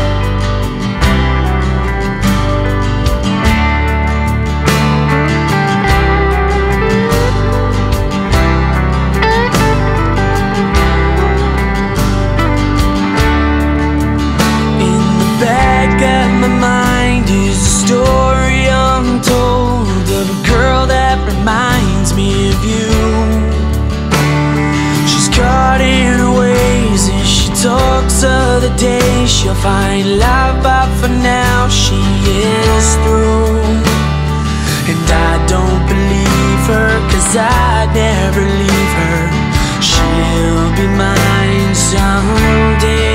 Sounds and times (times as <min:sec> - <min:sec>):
Music: 0:00.0 - 0:43.1.